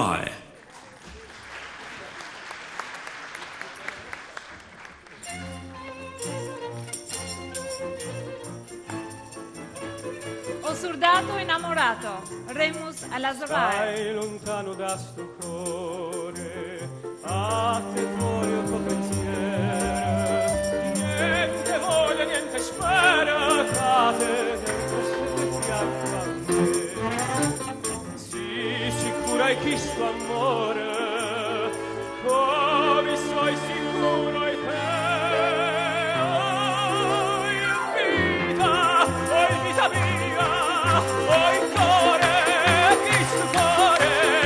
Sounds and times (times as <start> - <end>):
Opera: 0.0 - 44.4
Male singing: 13.2 - 44.4.